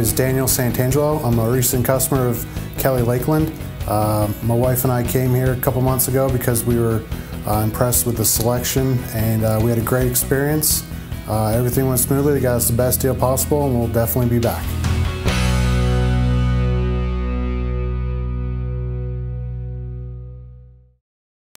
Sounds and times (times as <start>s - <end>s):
Speech: 0.0s - 14.8s
Music: 0.0s - 21.0s.